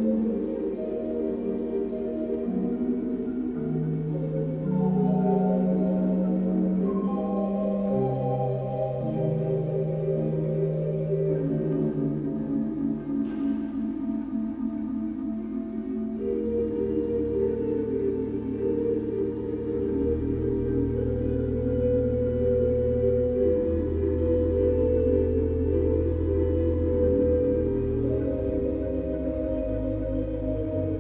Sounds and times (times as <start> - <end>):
Ambient music: 0.0 - 31.0
Piano: 0.0 - 31.0.